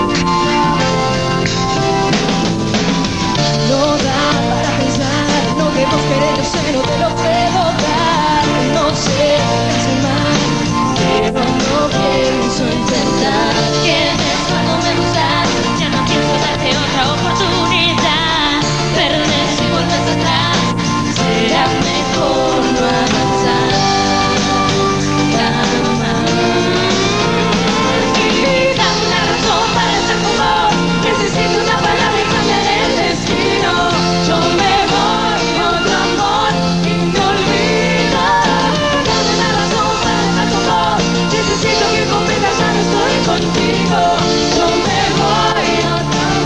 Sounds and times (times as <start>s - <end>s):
Soundtrack music: 0.0s - 46.4s.